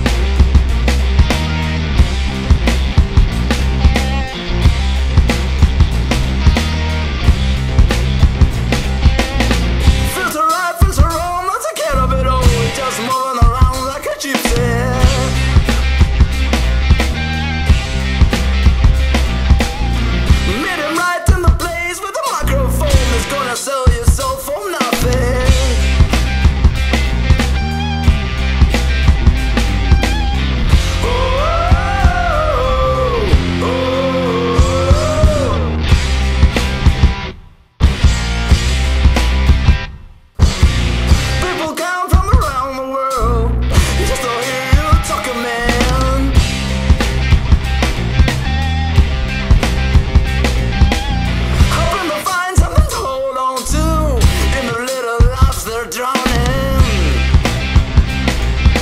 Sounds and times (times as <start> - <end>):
Heavy metal: 0.0 - 58.8
Punk rock: 0.0 - 58.8.